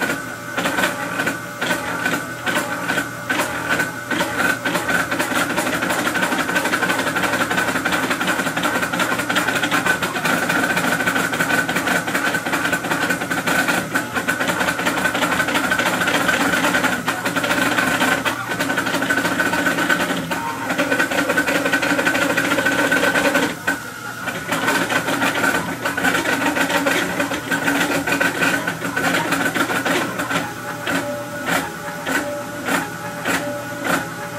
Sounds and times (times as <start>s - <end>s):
Printer: 0.0s - 34.3s.